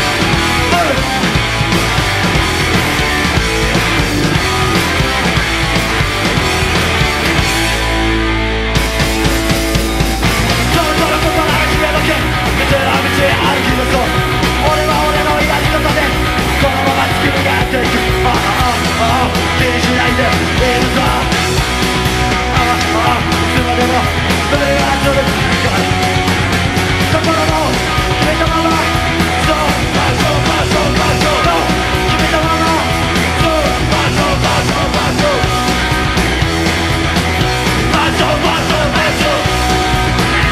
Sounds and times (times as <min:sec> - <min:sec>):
Punk rock: 0:00.0 - 0:40.5.